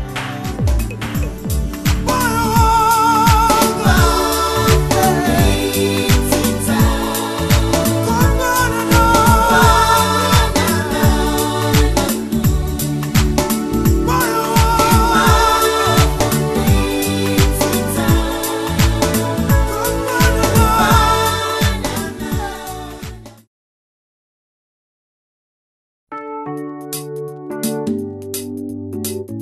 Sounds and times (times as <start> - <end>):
Gospel music: 0.0 - 23.4
Jazz: 0.0 - 23.4
Pop music: 0.0 - 23.4.